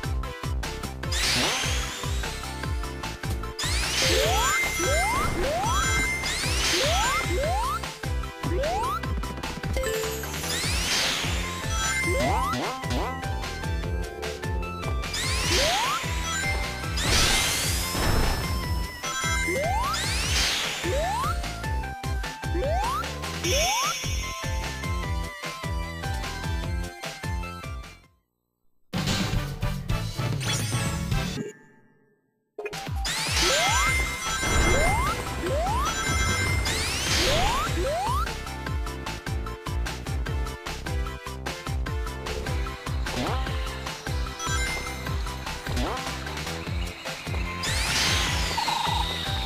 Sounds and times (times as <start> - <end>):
Music: 0.0 - 28.2, 28.9 - 31.6, 32.2 - 49.4.